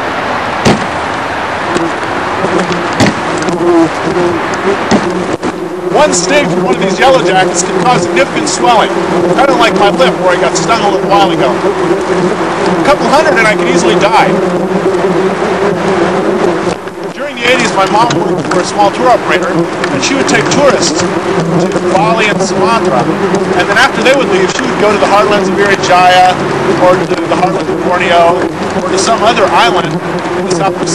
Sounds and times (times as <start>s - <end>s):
Speech: 6.0s - 11.6s, 12.8s - 14.4s, 17.2s - 21.0s, 21.6s - 30.9s.